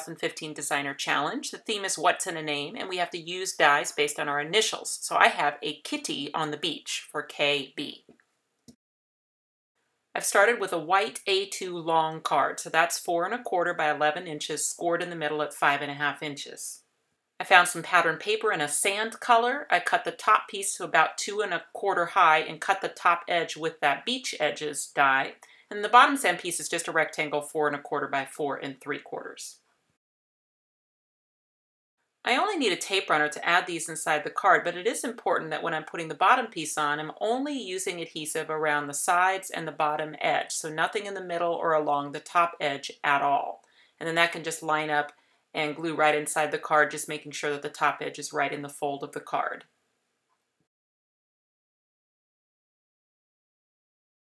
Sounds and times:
Speech: 0:00.0 - 0:08.1, 0:10.2 - 0:16.8, 0:17.4 - 0:29.6, 0:32.3 - 0:49.6.

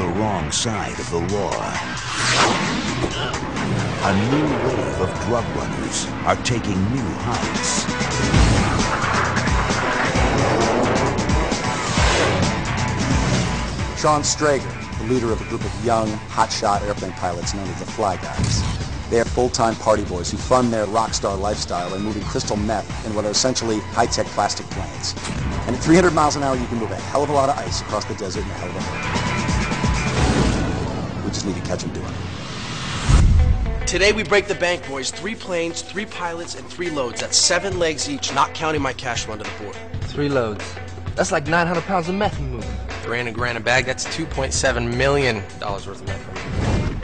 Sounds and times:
Speech: 0:00.0 - 0:01.8, 0:04.0 - 0:07.9, 0:14.0 - 0:28.9, 0:31.2 - 0:32.2, 0:33.9 - 0:46.2
Music: 0:00.0 - 0:47.0.

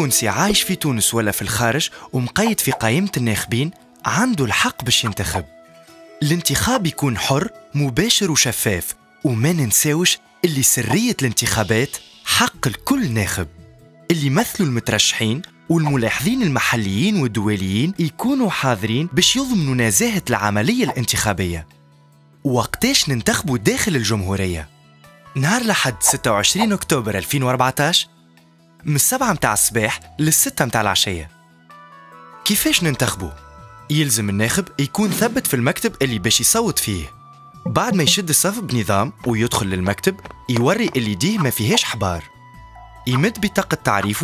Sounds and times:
Speech: 0:00.0 - 0:05.5, 0:06.2 - 0:21.7, 0:22.4 - 0:24.7, 0:25.4 - 0:28.1, 0:28.8 - 0:31.3, 0:32.4 - 0:42.3, 0:43.1 - 0:44.2
Music: 0:00.0 - 0:44.2.

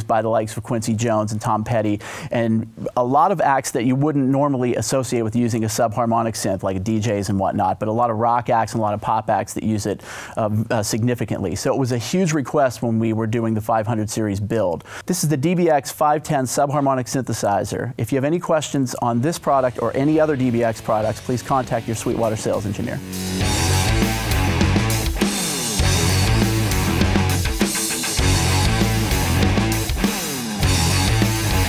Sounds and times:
Speech: 0:00.0 - 0:23.0.

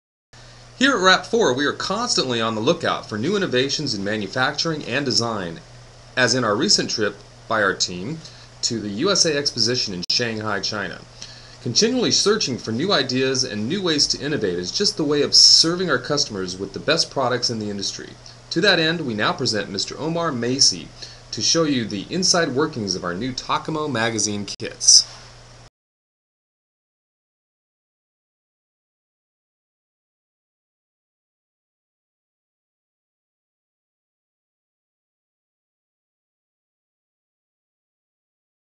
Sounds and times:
Speech: 0:00.8 - 0:05.6, 0:06.2 - 0:25.1.

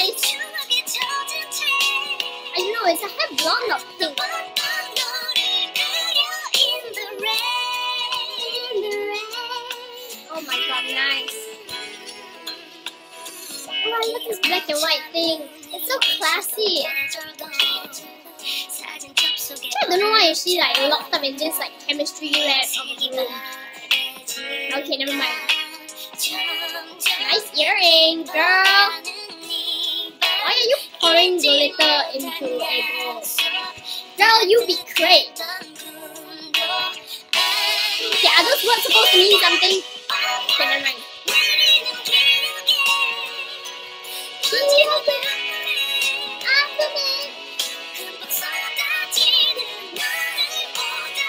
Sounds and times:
Inside, small room: 0:00.0 - 0:51.2
Music: 0:00.0 - 0:51.2
Speech: 0:02.6 - 0:04.1, 0:10.3 - 0:11.3, 0:13.8 - 0:16.9, 0:19.7 - 0:23.3, 0:24.7 - 0:25.4, 0:27.3 - 0:29.0, 0:30.4 - 0:33.1, 0:34.2 - 0:35.3, 0:38.2 - 0:39.8.

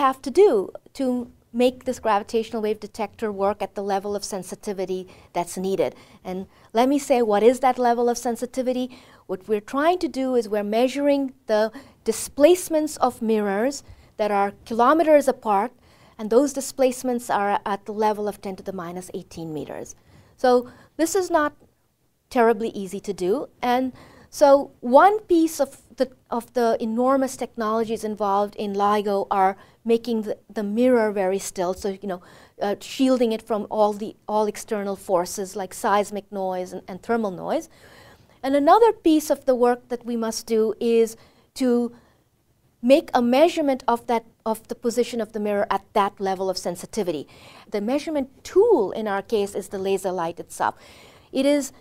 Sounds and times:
Speech: 0:00.0 - 0:21.6, 0:22.3 - 0:37.7, 0:38.4 - 0:42.0, 0:42.8 - 0:50.8, 0:51.4 - 0:51.8.

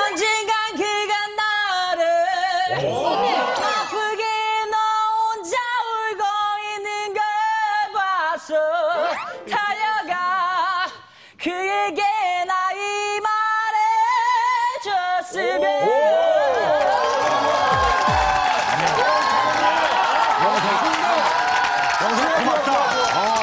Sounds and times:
Female singing: 0:00.0 - 0:02.9, 0:03.6 - 0:15.7
Music: 0:08.9 - 0:09.7, 0:17.7 - 0:18.9.

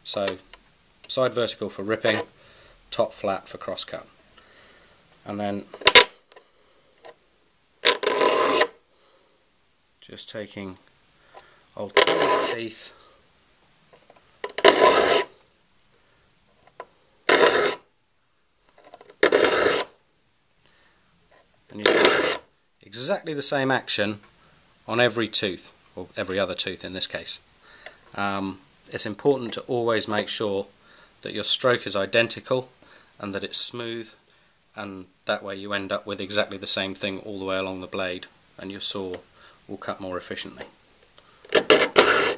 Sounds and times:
Filing (rasp): 0:07.9 - 0:08.8, 0:12.0 - 0:12.6, 0:14.6 - 0:15.3, 0:17.3 - 0:17.8, 0:19.2 - 0:19.9, 0:21.9 - 0:22.4, 0:41.5 - 0:42.3
Rub: 0:14.7 - 0:15.3.

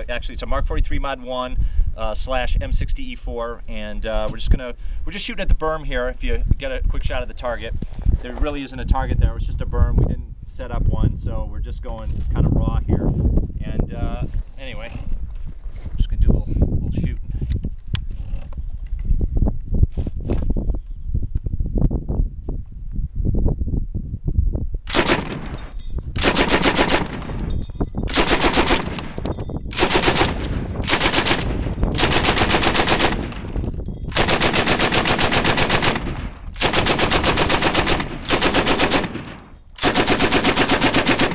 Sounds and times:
Machine gun: 0:24.9 - 0:27.4, 0:28.1 - 0:29.2, 0:29.8 - 0:33.5, 0:34.1 - 0:41.3.

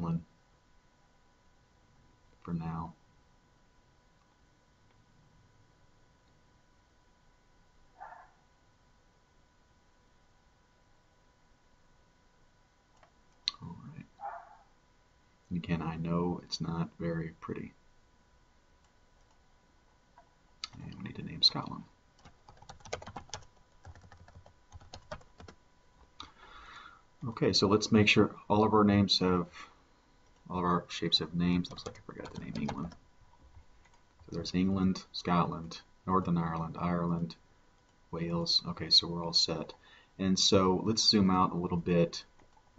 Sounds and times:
Speech: 0:00.0 - 0:00.3, 0:02.4 - 0:03.0, 0:13.5 - 0:14.1, 0:15.5 - 0:17.8, 0:20.7 - 0:21.9, 0:27.2 - 0:29.6, 0:30.5 - 0:33.0, 0:34.3 - 0:37.4, 0:38.2 - 0:42.3
Computer keyboard: 0:22.2 - 0:25.6, 0:31.7 - 0:33.0.

